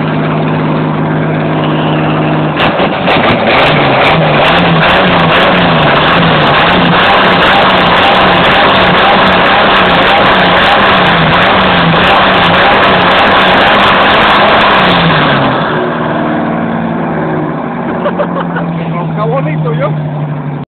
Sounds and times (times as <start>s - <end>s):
Speech: 18.8s - 20.0s.